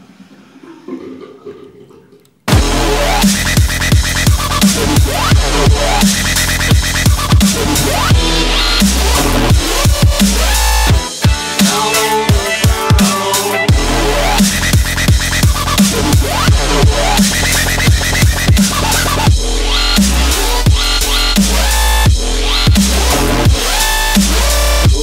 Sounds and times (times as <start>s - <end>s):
Dubstep: 2.5s - 25.0s.